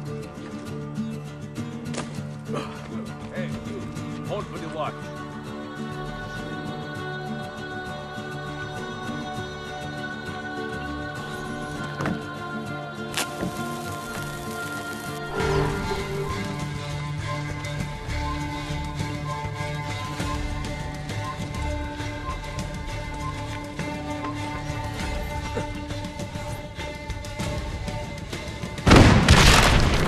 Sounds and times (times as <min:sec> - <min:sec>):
Music: 0:00.0 - 0:30.0
Boom: 0:28.9 - 0:30.0.